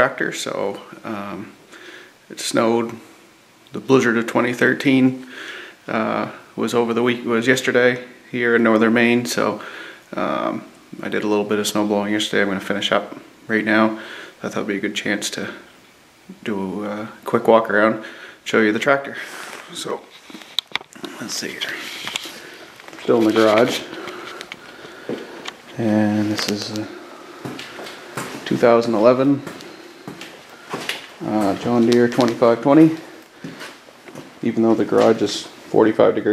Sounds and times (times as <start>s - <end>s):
Speech: 0.0s - 1.6s, 2.3s - 3.0s, 3.7s - 5.3s, 5.9s - 15.7s, 16.3s - 20.1s, 21.0s - 22.0s, 23.0s - 23.9s, 25.7s - 27.0s, 28.4s - 29.6s, 31.2s - 33.2s, 34.4s - 36.3s.